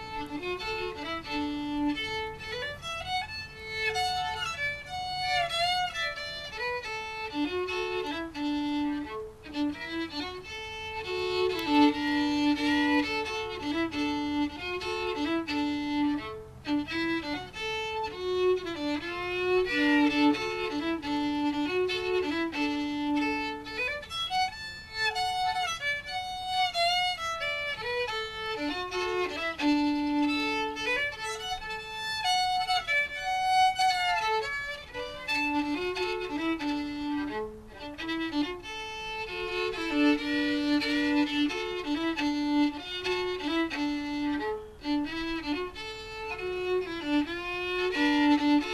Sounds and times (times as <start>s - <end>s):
Violin, fiddle: 0.0s - 48.7s.